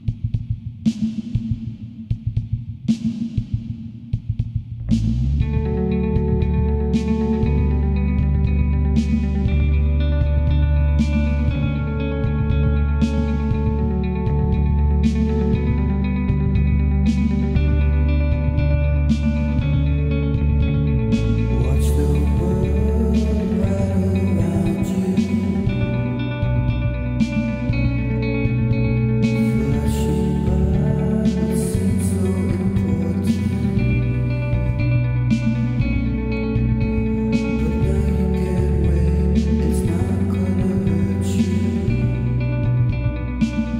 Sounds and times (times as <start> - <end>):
Music: 0.0 - 43.7.